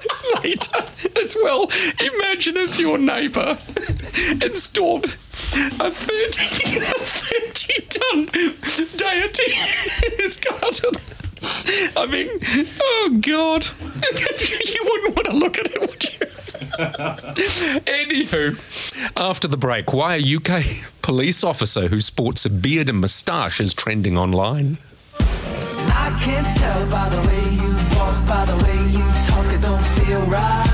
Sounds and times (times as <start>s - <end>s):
Speech: 1.2s - 3.6s, 12.0s - 13.8s, 14.5s - 16.0s, 19.2s - 24.9s
Music: 25.1s - 30.7s.